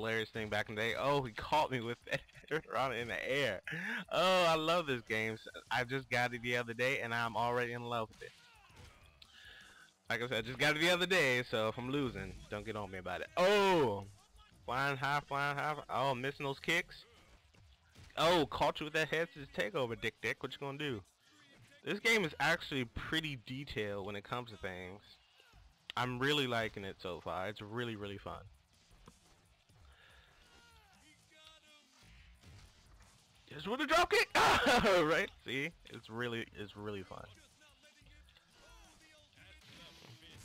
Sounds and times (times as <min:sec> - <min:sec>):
Speech: 0:00.0 - 0:08.8, 0:10.1 - 0:14.1, 0:14.7 - 0:17.1, 0:18.2 - 0:21.0, 0:21.8 - 0:25.2, 0:25.9 - 0:28.4, 0:33.5 - 0:40.4.